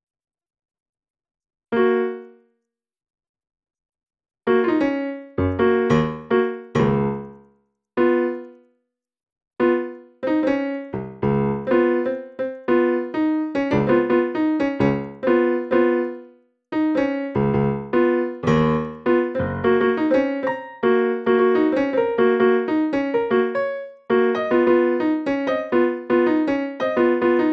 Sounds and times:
Music: 1.8 - 2.6, 4.5 - 8.7, 9.6 - 27.5.

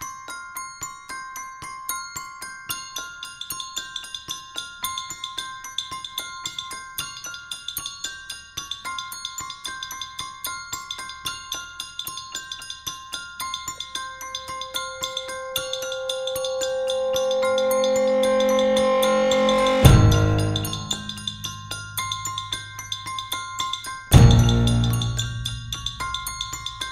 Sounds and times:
Music: 0.0 - 26.9.

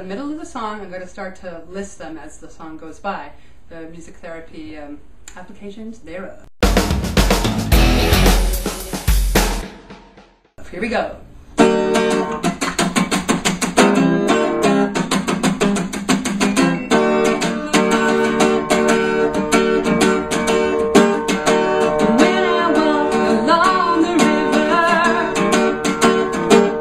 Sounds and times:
Speech: 0.0 - 6.5, 10.6 - 11.3
Jazz: 6.6 - 9.6, 11.6 - 26.8
Pop music: 6.6 - 9.7, 17.2 - 26.8.

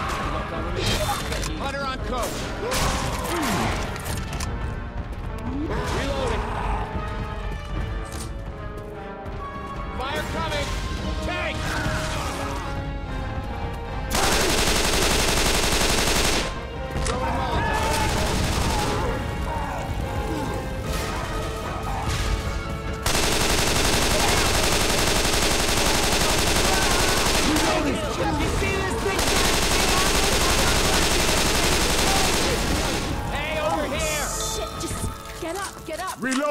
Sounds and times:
Music: 0.0 - 36.5.

